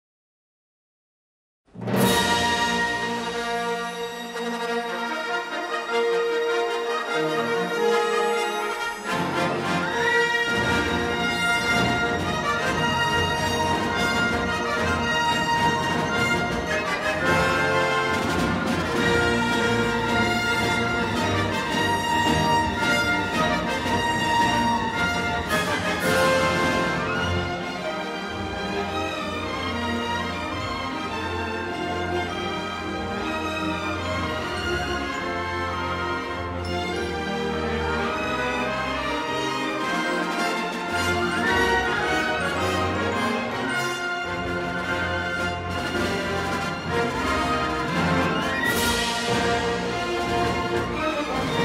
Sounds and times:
Music: 1.7 - 51.6.

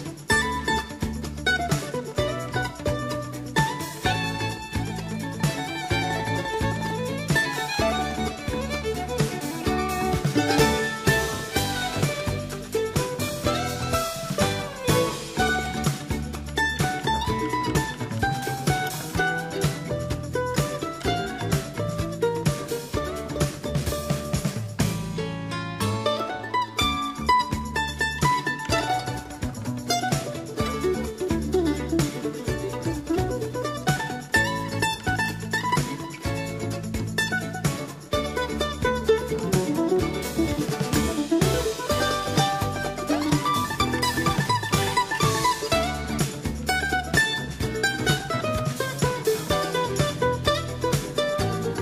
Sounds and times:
Music: 0.0 - 51.8.

